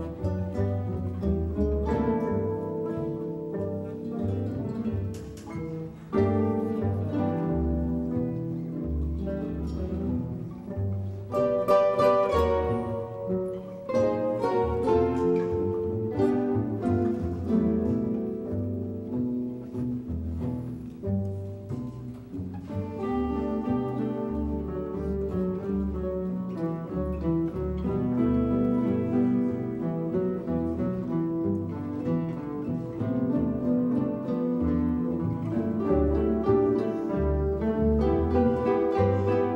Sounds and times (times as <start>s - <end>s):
Double bass: 0.0s - 39.5s
Guitar: 0.0s - 39.5s
Orchestra: 0.0s - 39.5s.